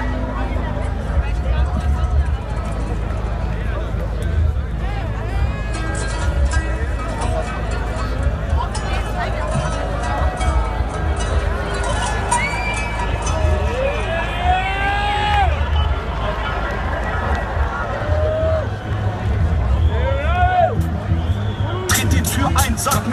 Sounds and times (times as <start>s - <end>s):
Music: 0.0s - 23.1s.